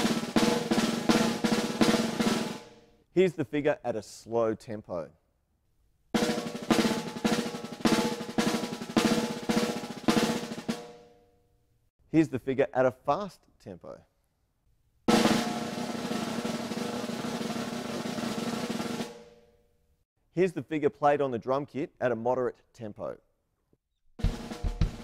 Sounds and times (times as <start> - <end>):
Drum: 0.0 - 2.8, 6.2 - 11.0, 15.1 - 19.4, 24.2 - 25.0
Drum kit: 0.0 - 2.8, 6.2 - 11.0, 15.1 - 19.4, 24.2 - 25.0
Speech: 3.2 - 5.2, 12.1 - 14.1, 20.4 - 23.2.